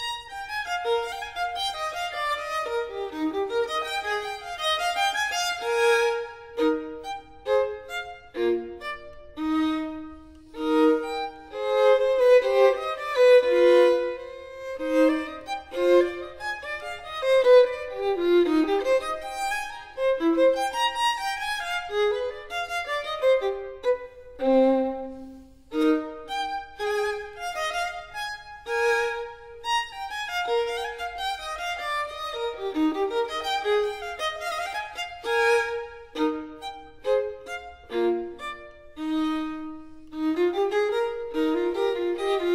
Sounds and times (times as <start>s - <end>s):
Violin, fiddle: 0.0s - 42.5s.